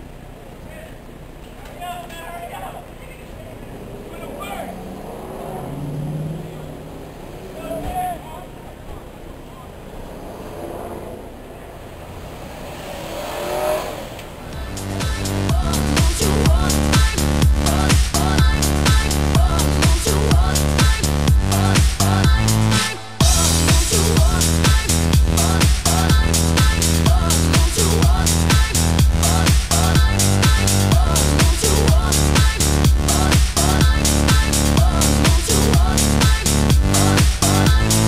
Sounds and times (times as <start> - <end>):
Car: 0.0 - 22.2
Outside, urban or manmade: 0.0 - 38.0
Speech: 0.6 - 4.8, 7.5 - 9.8.